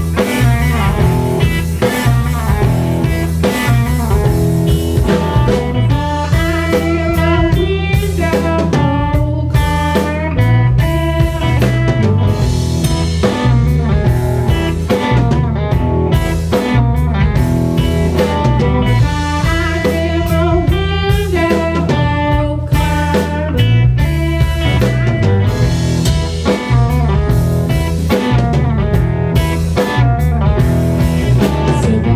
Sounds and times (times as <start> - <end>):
Music: 0.0 - 32.1.